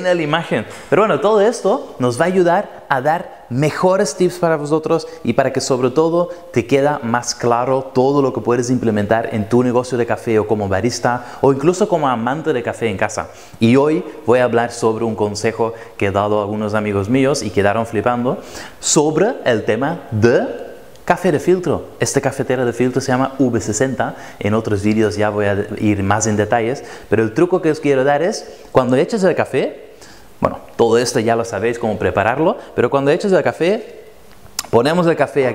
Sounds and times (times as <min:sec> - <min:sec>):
Speech: 0:00.0 - 0:29.8, 0:30.4 - 0:34.0, 0:34.6 - 0:35.5.